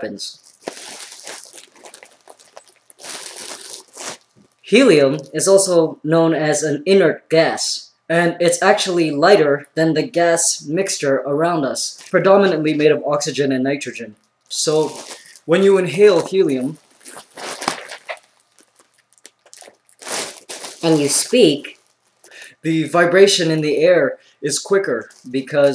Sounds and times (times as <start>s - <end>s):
Speech: 0.0s - 0.4s, 4.7s - 16.8s, 20.8s - 21.8s, 22.6s - 25.7s.